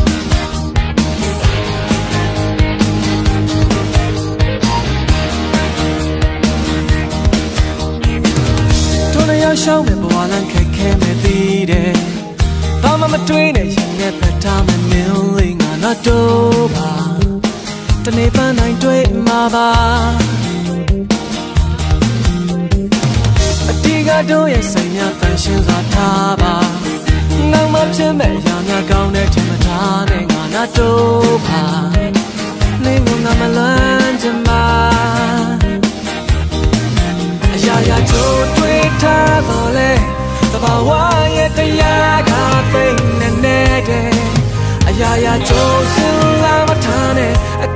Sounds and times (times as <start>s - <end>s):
Dance music: 0.0s - 47.7s
Happy music: 0.0s - 47.7s.